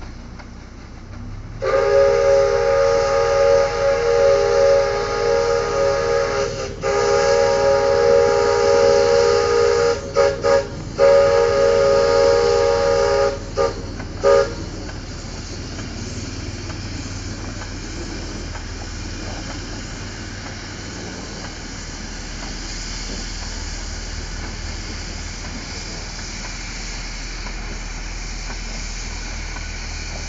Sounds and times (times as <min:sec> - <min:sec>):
Railroad car, train wagon: 0:00.0 - 0:30.2
Train: 0:00.0 - 0:30.2.